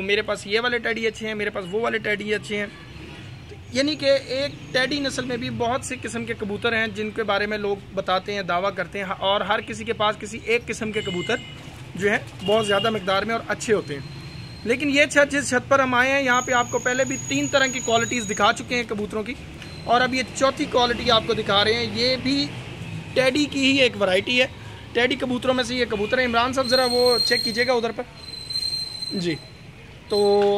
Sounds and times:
Speech: 0.0s - 2.8s, 3.6s - 11.4s, 12.0s - 14.0s, 14.7s - 22.5s, 30.1s - 30.5s
Outside, urban or manmade: 0.0s - 30.5s.

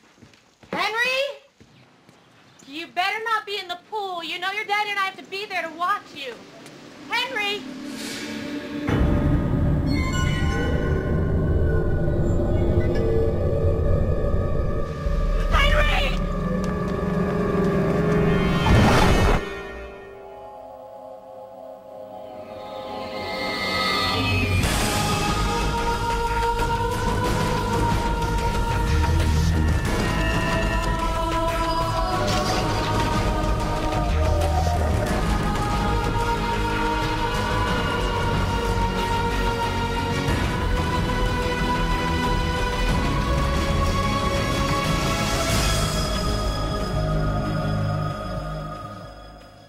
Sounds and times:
Scary music: 7.6s - 49.6s.

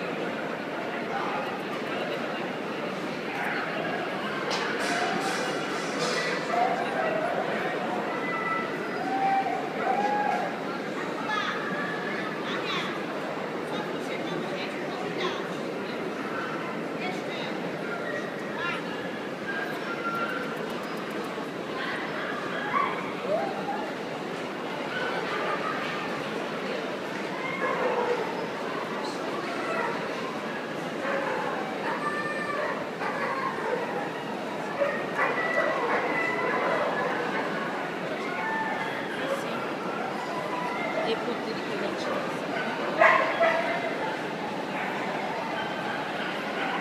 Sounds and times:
Speech: 0.0s - 46.8s.

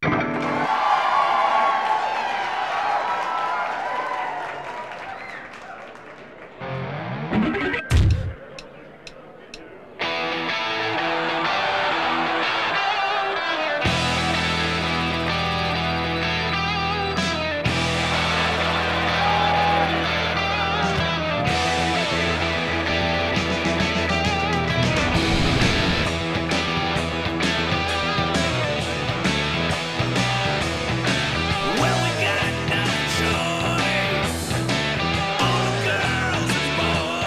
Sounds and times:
Guitar: 0.0s - 0.8s, 6.6s - 8.7s, 10.0s - 37.2s.

